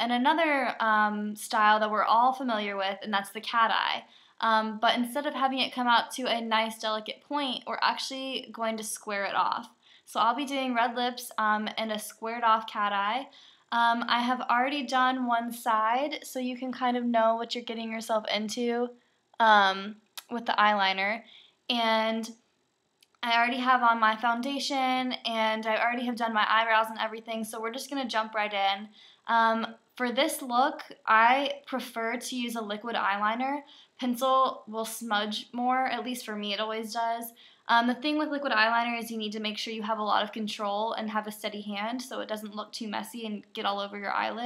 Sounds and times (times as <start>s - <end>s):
Speech: 0.0s - 22.4s, 23.2s - 44.4s.